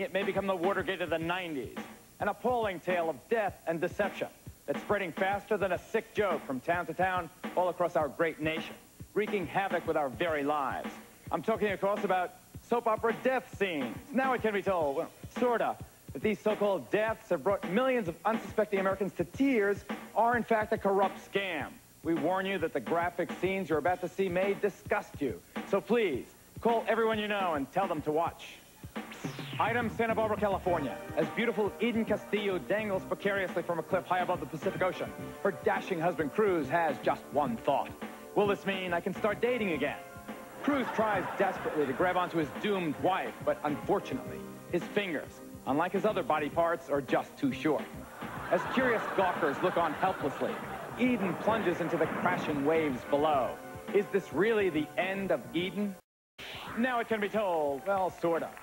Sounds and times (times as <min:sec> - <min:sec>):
Speech: 0:00.0 - 0:28.7, 0:29.6 - 0:40.0, 0:40.6 - 0:56.0, 0:56.8 - 0:58.6
Music: 0:00.0 - 0:58.6.